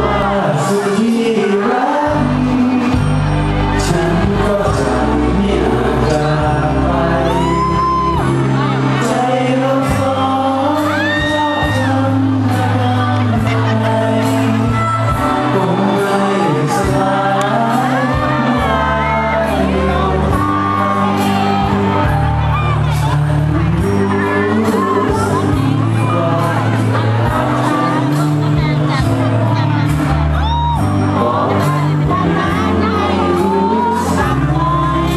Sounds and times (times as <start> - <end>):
Male singing: 0.0 - 30.4, 31.0 - 35.1
Music: 0.0 - 35.1.